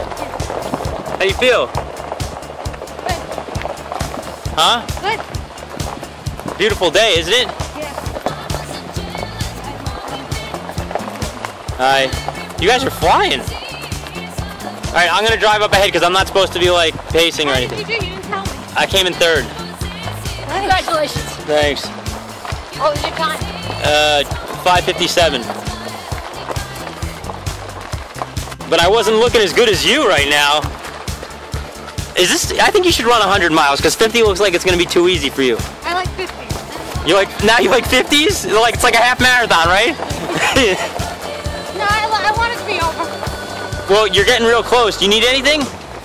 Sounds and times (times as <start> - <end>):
Music: 0.0 - 46.0
Run: 0.0 - 46.0
Speech: 11.8 - 13.5, 15.0 - 19.5, 22.8 - 25.5, 28.7 - 30.6, 32.2 - 40.0, 43.9 - 45.7.